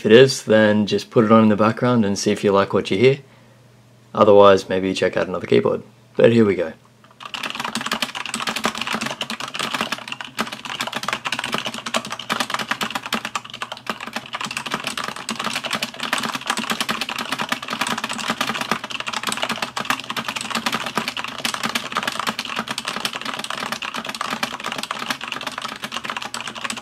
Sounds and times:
Computer keyboard: 7.1 - 26.8.

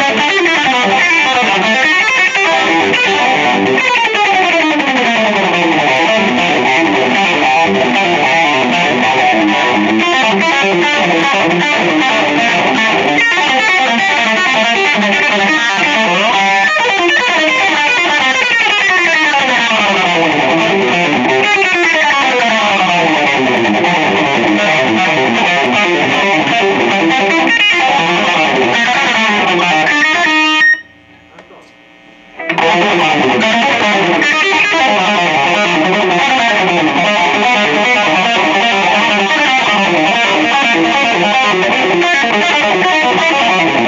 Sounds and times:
Electric guitar: 0.0 - 43.8.

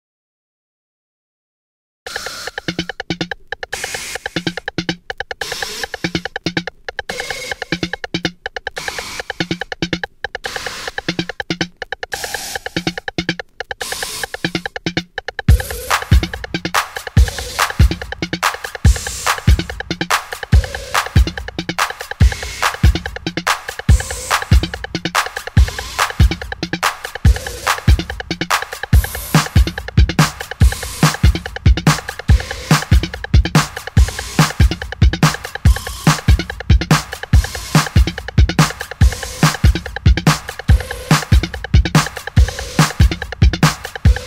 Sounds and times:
Drum machine: 2.1 - 44.2.

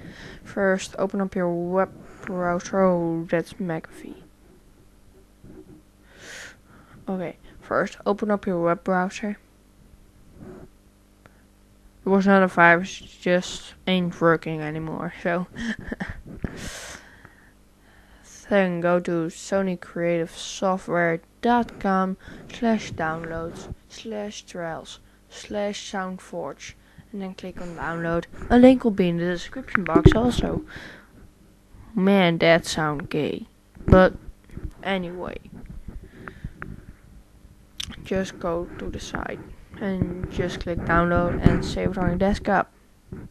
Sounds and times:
Speech: 0.4 - 4.3, 7.0 - 9.4, 12.0 - 17.0, 18.2 - 31.0, 31.9 - 34.2, 34.8 - 35.4, 37.8 - 42.7.

